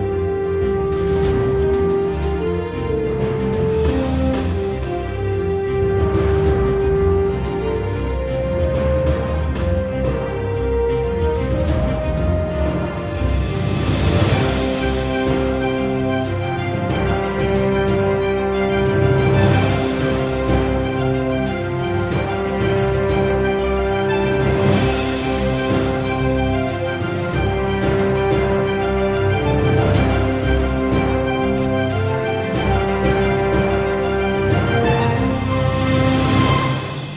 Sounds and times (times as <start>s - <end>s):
Theme music: 0.0s - 37.1s.